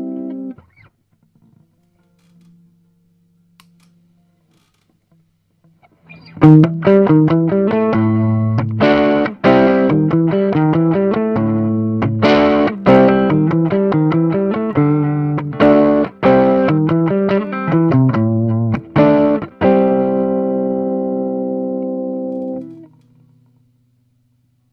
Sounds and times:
Guitar: 0.0 - 24.0
Distortion: 0.0 - 24.7
Effects unit: 0.0 - 24.7.

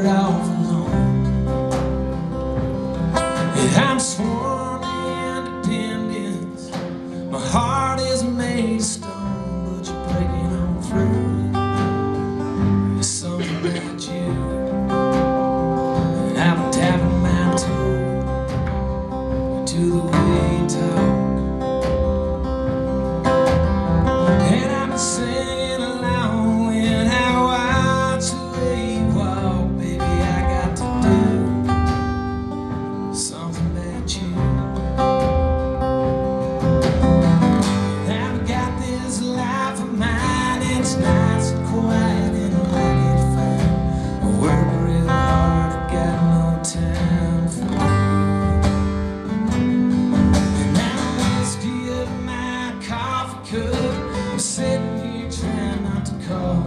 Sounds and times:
Music: 0.0 - 56.6.

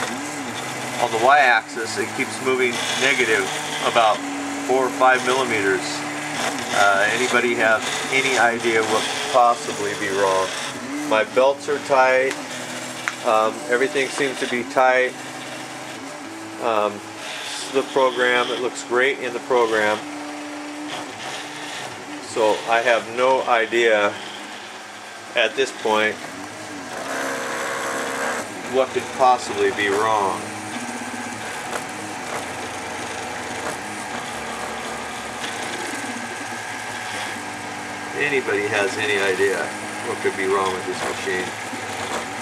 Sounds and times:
Printer: 0.0 - 42.4
Speech: 1.0 - 6.0, 6.7 - 10.5, 11.1 - 12.4, 13.2 - 15.2, 16.6 - 20.0, 22.2 - 24.2, 25.4 - 26.2, 28.6 - 30.5, 38.2 - 41.5.

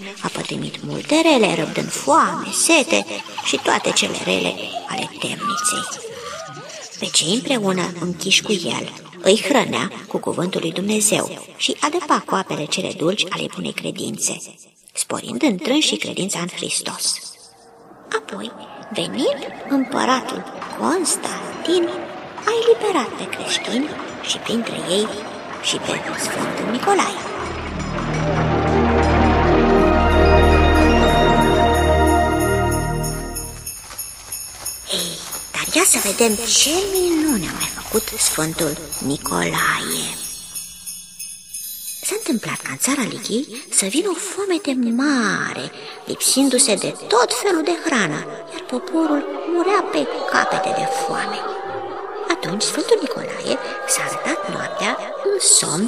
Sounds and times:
Speech: 0.0 - 17.5, 18.1 - 27.4, 34.9 - 40.3, 42.0 - 55.8.

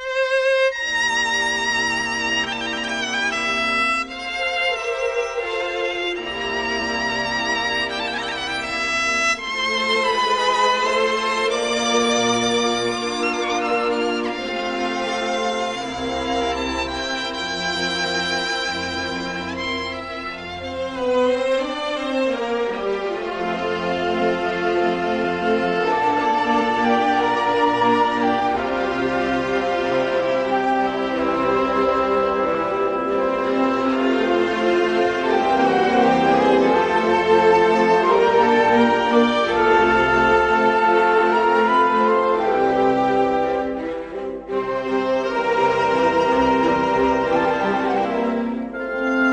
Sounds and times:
Violin, fiddle: 0.0 - 49.3.

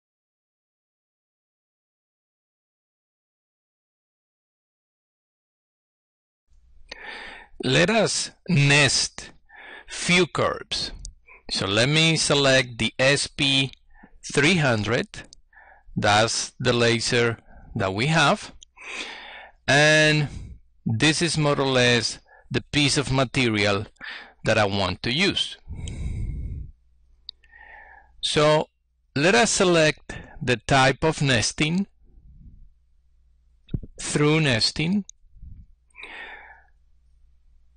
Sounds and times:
Speech: 7.6 - 9.3, 9.9 - 15.3, 16.0 - 18.6, 19.7 - 20.3, 20.9 - 25.6, 28.2 - 31.9, 34.0 - 35.1.

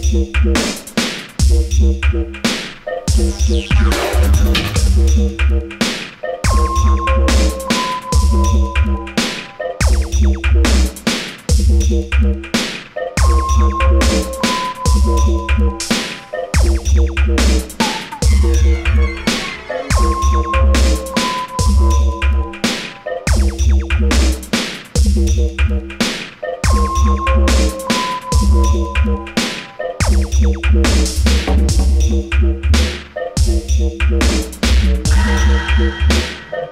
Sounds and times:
Dubstep: 0.0 - 36.7.

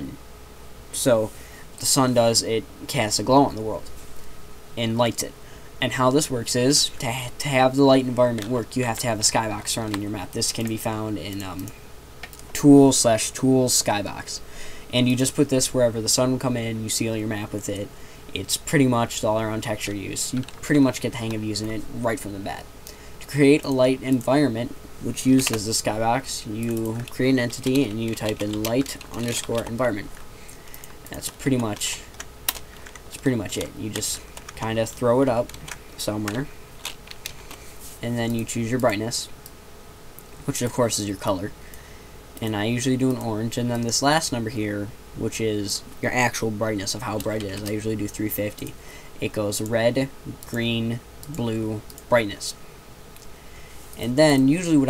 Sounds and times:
Speech: 0.0 - 0.2, 1.0 - 3.9, 4.8 - 11.8, 12.5 - 30.1, 31.1 - 32.2, 33.1 - 36.5, 38.0 - 39.4, 40.4 - 41.6, 42.4 - 52.6, 54.0 - 54.9.

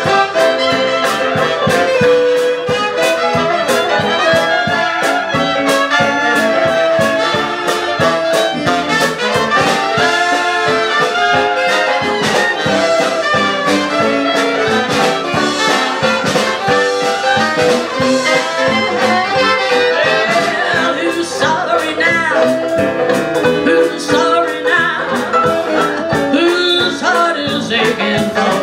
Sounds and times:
Music: 0.0 - 28.6.

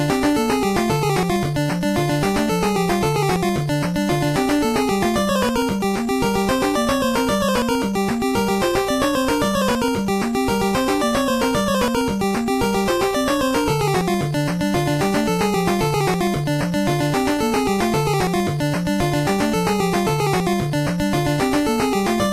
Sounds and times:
Music: 0.0 - 22.3.

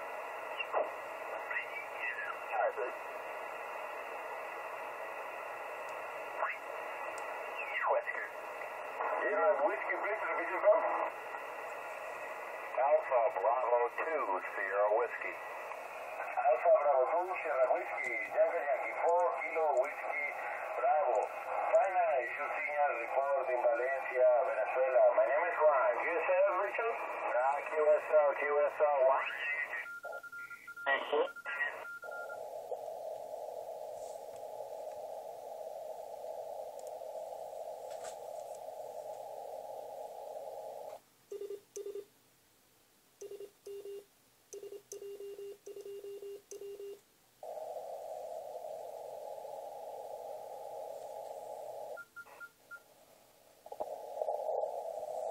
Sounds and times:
Radio: 0.0 - 41.0, 47.4 - 52.9, 53.6 - 55.3
Speech: 1.5 - 3.0, 7.6 - 8.4, 9.1 - 11.2, 12.7 - 15.4, 16.2 - 29.9.

